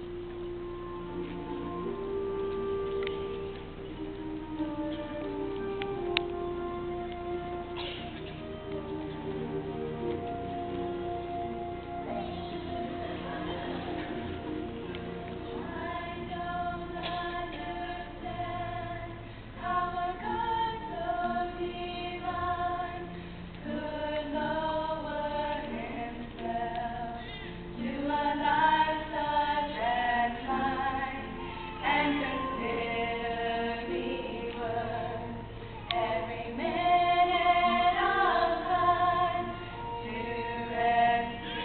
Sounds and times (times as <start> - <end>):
Choir: 4.3 - 41.6
Female singing: 15.6 - 23.0, 23.6 - 27.2, 27.8 - 41.6.